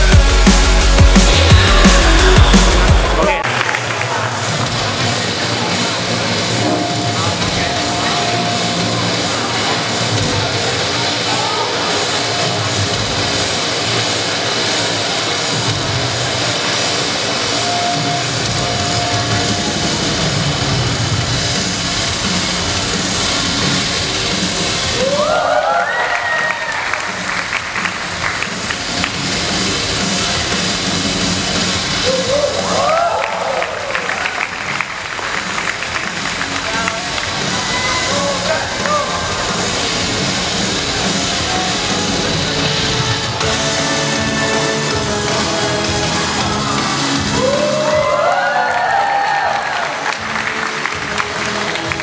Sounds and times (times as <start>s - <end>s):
Inside, public space: 0.0s - 52.0s.